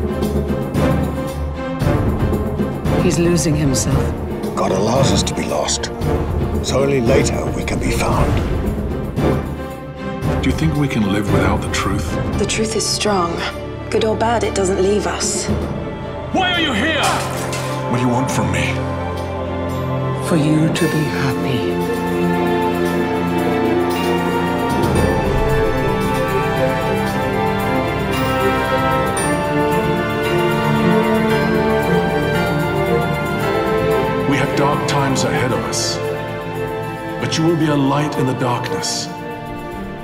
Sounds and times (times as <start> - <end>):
Music: 0.0 - 40.0
Speech: 6.7 - 8.4, 16.3 - 17.2, 37.2 - 39.1.